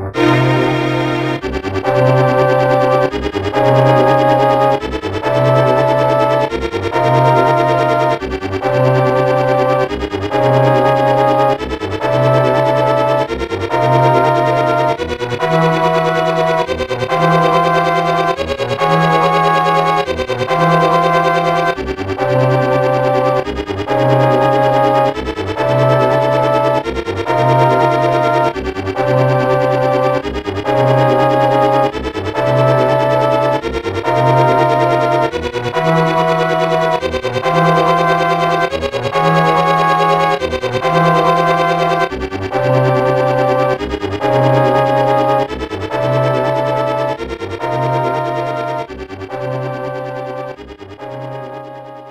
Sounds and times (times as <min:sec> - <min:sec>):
Music: 0:00.0 - 0:52.1.